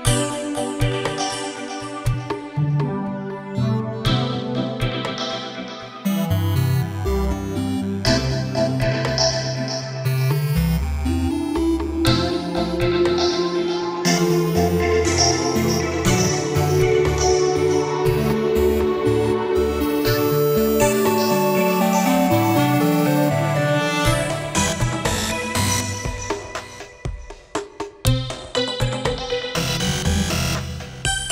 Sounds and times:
Music: 0.0s - 31.3s.

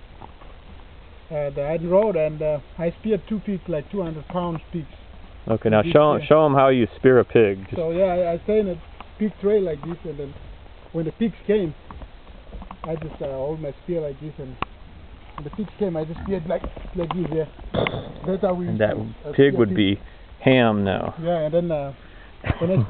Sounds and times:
Speech: 1.3s - 4.9s, 12.9s - 14.6s, 15.4s - 17.5s, 18.2s - 22.0s.

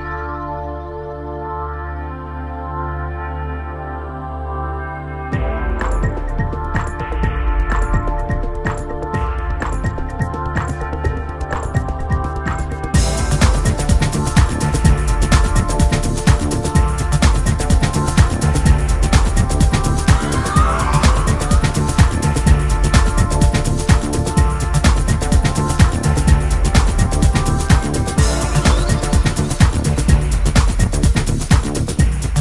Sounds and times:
Music: 0.0s - 32.4s.

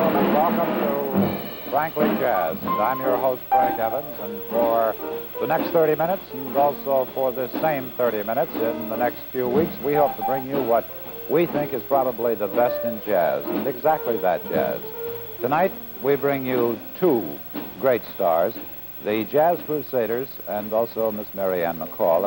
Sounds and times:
Music: 0.0s - 19.4s, 20.1s - 22.2s
Speech: 0.0s - 22.2s.

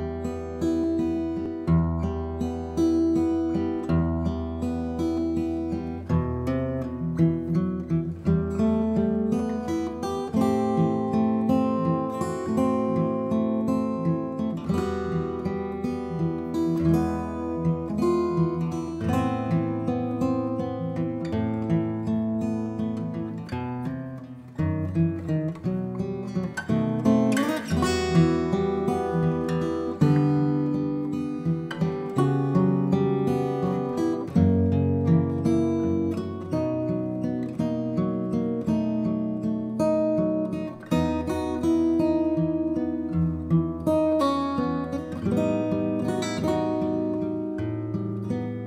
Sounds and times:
Acoustic guitar: 0.0s - 48.6s.

